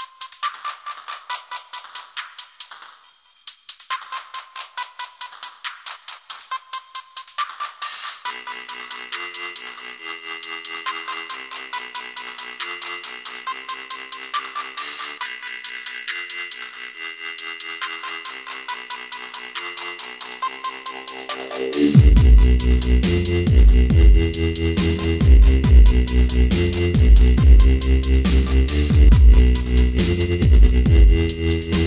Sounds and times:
Dubstep: 0.0s - 31.8s.

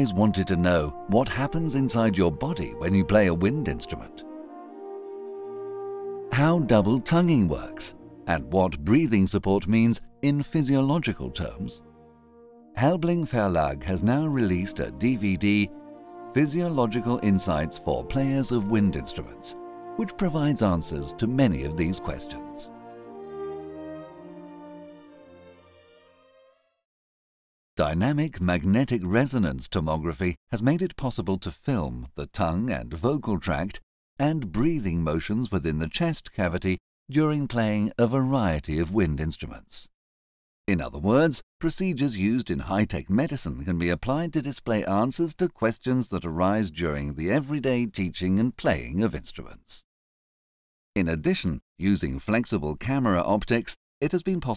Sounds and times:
Speech: 0.0s - 4.2s, 6.3s - 11.8s, 12.8s - 15.7s, 16.4s - 22.7s, 27.8s - 39.9s, 40.7s - 49.8s, 51.0s - 54.5s
Music: 0.0s - 26.9s.

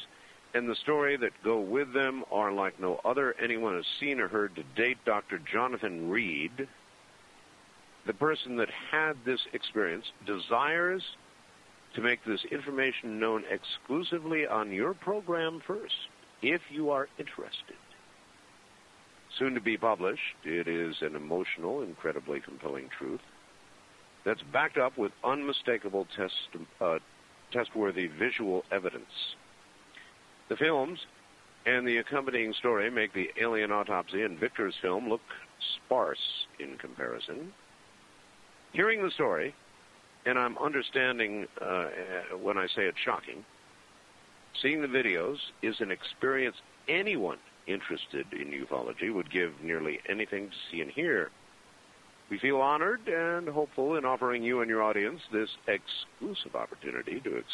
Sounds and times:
Speech: 0.0s - 6.7s, 8.1s - 11.2s, 11.9s - 17.8s, 19.3s - 23.2s, 24.3s - 29.4s, 30.5s - 37.6s, 38.8s - 39.6s, 40.3s - 43.5s, 44.6s - 51.3s, 52.3s - 57.5s.

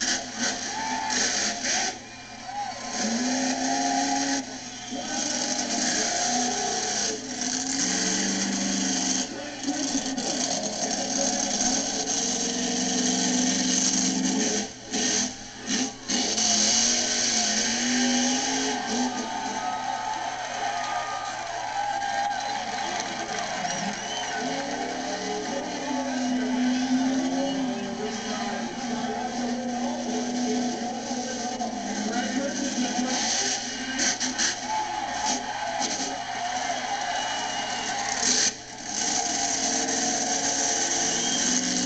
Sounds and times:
Car: 0.0s - 21.1s, 21.9s - 41.8s
Speech: 9.3s - 11.9s, 24.4s - 33.7s.

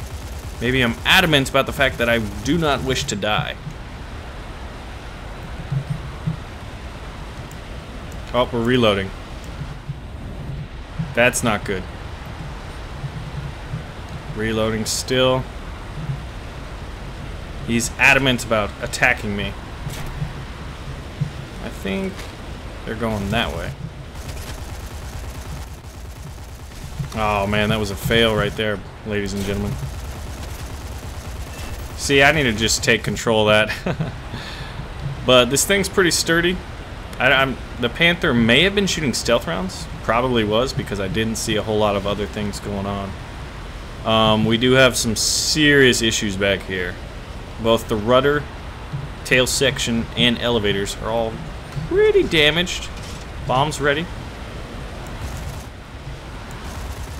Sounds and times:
Speech: 0.6s - 3.6s, 8.3s - 9.1s, 11.2s - 11.9s, 14.4s - 15.4s, 17.7s - 19.6s, 21.6s - 22.2s, 22.9s - 23.8s, 27.2s - 29.8s, 32.0s - 33.8s, 35.3s - 36.6s, 37.2s - 43.2s, 44.1s - 47.0s, 47.6s - 48.5s, 49.2s - 54.1s.

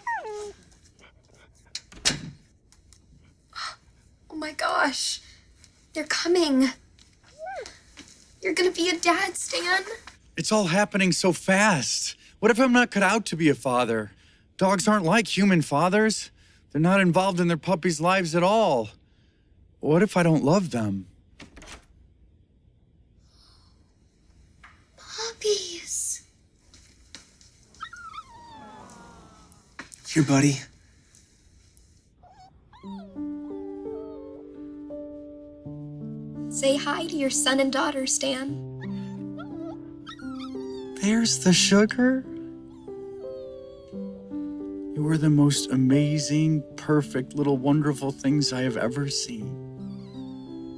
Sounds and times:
Dog: 0.0s - 1.9s, 27.8s - 29.5s, 32.2s - 34.4s, 38.8s - 41.2s, 42.7s - 44.0s.

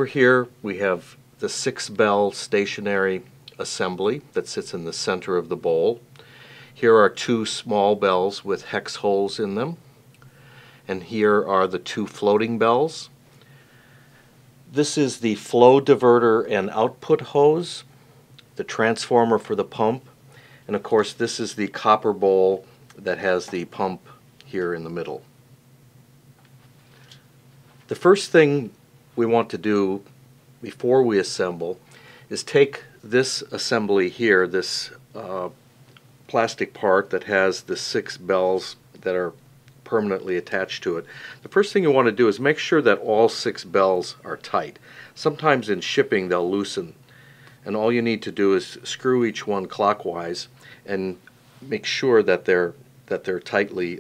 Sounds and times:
Speech: 0.0s - 6.0s, 6.8s - 9.8s, 10.9s - 13.2s, 14.7s - 17.9s, 18.6s - 20.1s, 20.7s - 25.3s, 27.9s - 35.6s, 36.3s - 47.0s, 47.6s - 54.0s.

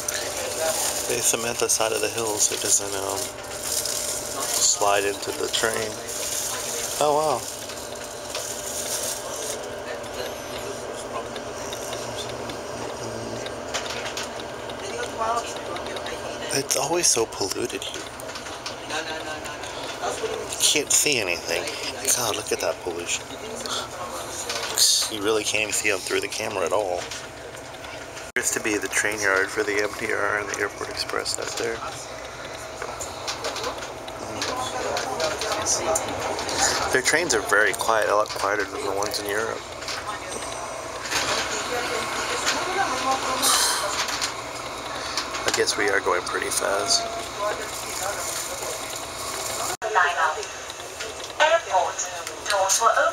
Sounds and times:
Inside, public space: 0.0s - 53.1s
Speech: 0.1s - 3.3s, 4.4s - 7.5s, 18.9s - 27.0s, 28.4s - 32.0s, 34.2s - 40.4s, 45.4s - 48.8s.

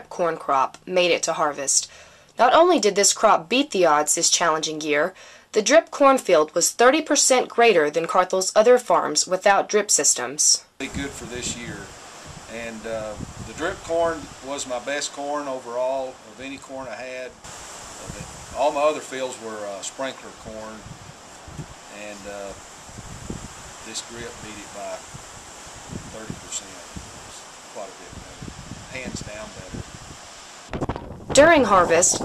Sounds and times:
Speech: 0.0s - 11.9s, 12.5s - 17.4s, 18.0s - 20.8s, 21.9s - 22.6s, 23.9s - 25.0s, 26.2s - 29.8s, 31.4s - 32.2s.

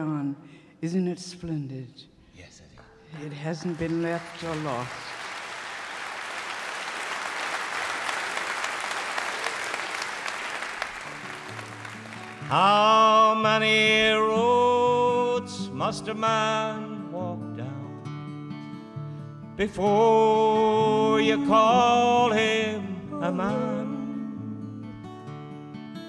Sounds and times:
Music: 10.8s - 26.0s.

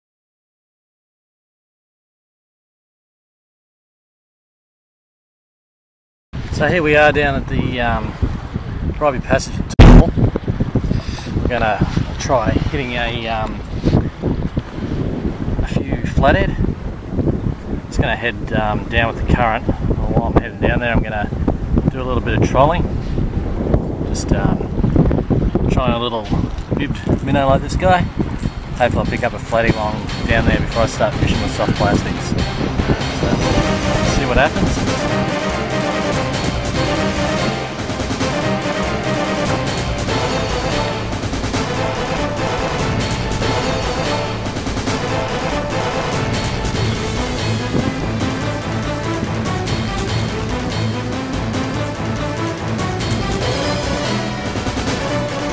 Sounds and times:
Speech: 6.5s - 8.1s, 9.0s - 9.7s, 11.5s - 13.6s, 15.6s - 16.6s, 17.9s - 21.3s, 21.9s - 22.8s, 24.1s - 24.6s, 25.7s - 28.1s, 28.8s - 32.3s, 33.2s - 34.8s
Music: 28.8s - 55.5s.

